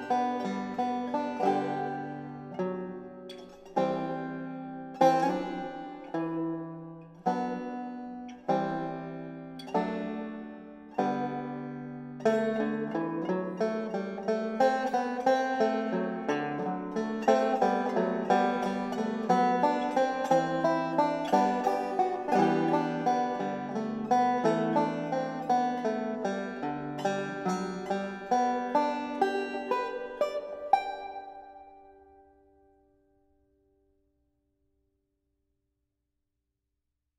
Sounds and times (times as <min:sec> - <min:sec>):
Banjo: 0:00.0 - 0:32.6.